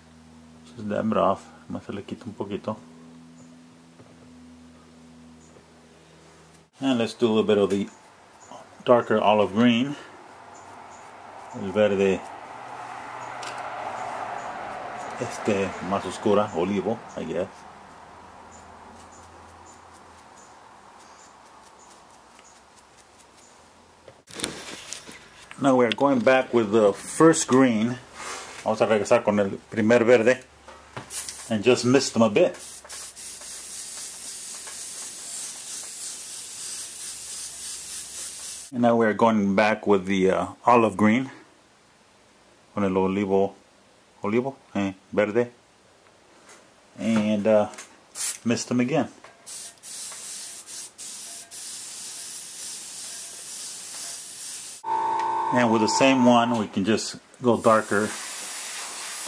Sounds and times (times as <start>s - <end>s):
Speech: 0.7s - 2.8s, 6.8s - 10.0s, 11.6s - 12.2s, 15.2s - 17.6s, 25.6s - 30.5s, 31.5s - 32.6s, 38.8s - 41.4s, 42.8s - 43.6s, 44.2s - 45.6s, 47.0s - 47.8s, 48.4s - 49.2s, 55.5s - 58.2s.